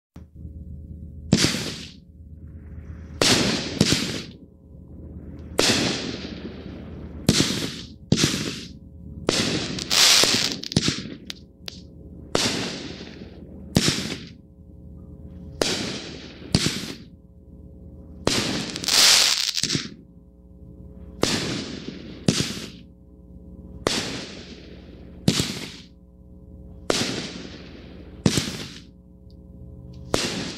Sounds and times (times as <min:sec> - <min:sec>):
Fireworks: 0:01.3 - 0:02.0, 0:02.6 - 0:04.4, 0:05.4 - 0:14.4, 0:15.5 - 0:17.2, 0:18.2 - 0:20.0, 0:21.1 - 0:22.9, 0:23.8 - 0:26.0, 0:26.8 - 0:28.9, 0:30.0 - 0:30.5.